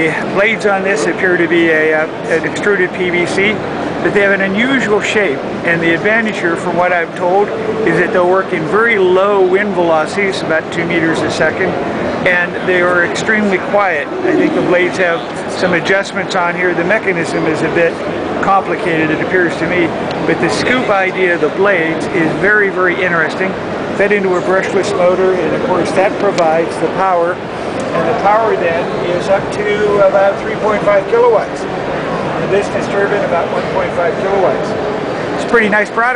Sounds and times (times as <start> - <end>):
Speech: 0.0 - 34.8, 35.4 - 36.1.